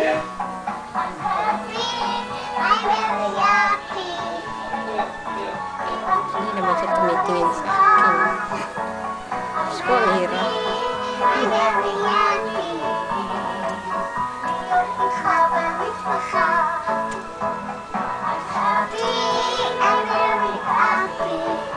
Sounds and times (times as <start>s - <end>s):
Music: 0.0s - 21.7s
Child singing: 1.0s - 4.9s, 5.8s - 8.5s, 9.6s - 13.5s, 14.5s - 17.2s, 18.2s - 21.7s
Speech: 6.2s - 8.2s.